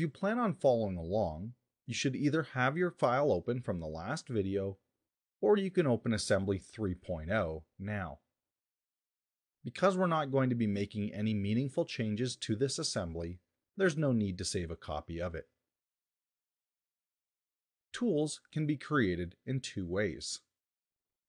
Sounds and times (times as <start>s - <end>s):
Speech: 0.0s - 4.8s, 5.4s - 8.2s, 9.7s - 15.5s, 18.0s - 20.5s.